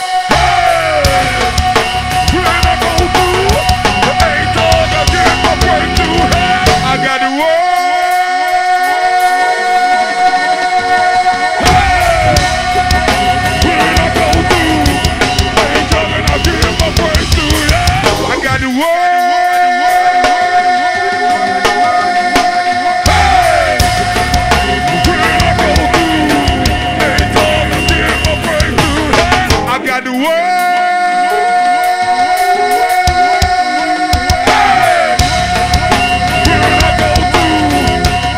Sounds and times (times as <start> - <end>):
Music: 0.0 - 38.3.